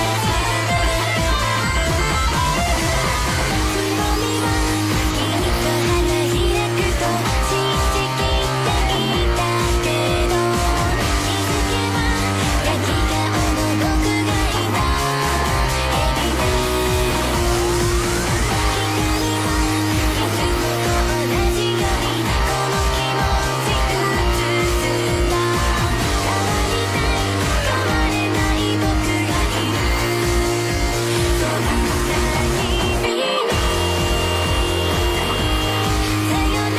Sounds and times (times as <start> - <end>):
Electric guitar: 0.0 - 36.7.